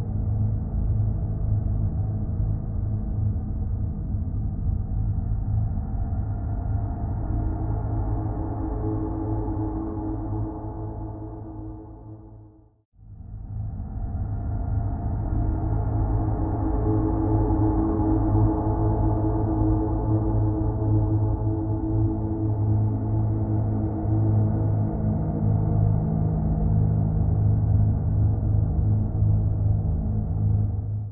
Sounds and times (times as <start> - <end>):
Music: 0.0 - 31.1.